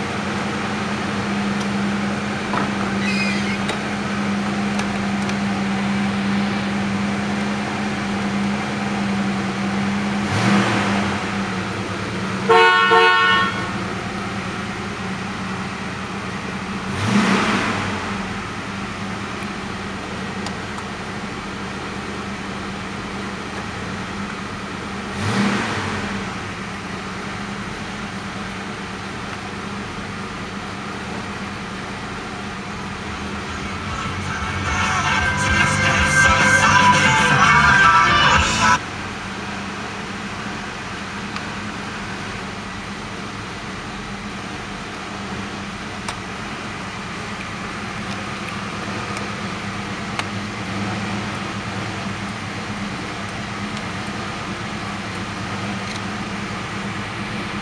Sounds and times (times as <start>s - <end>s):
Car: 0.0s - 57.6s.